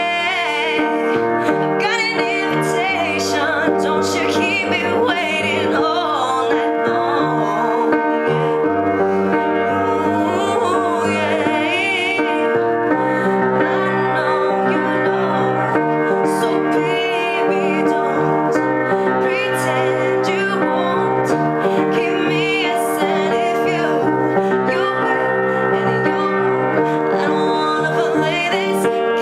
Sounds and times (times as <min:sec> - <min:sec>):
Female singing: 0:00.0 - 0:08.7, 0:09.3 - 0:29.2
Music: 0:00.0 - 0:29.2.